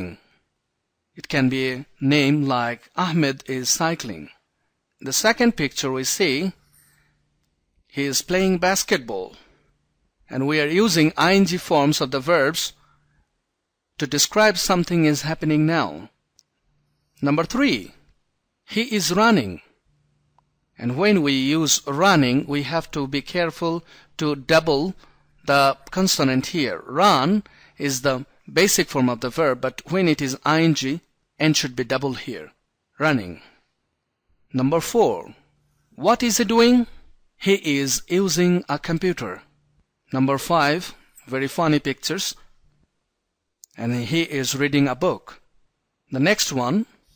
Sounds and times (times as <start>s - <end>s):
Narration, monologue: 0.0s - 47.1s.